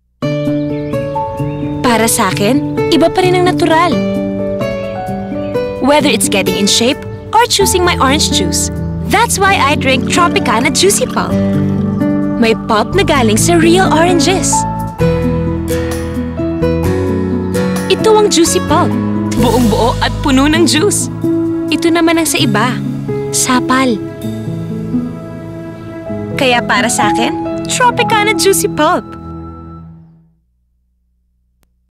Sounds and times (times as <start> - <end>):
Music: 0.2 - 30.4
Speech: 5.8 - 11.4, 12.4 - 14.6, 17.9 - 21.1, 26.4 - 29.1.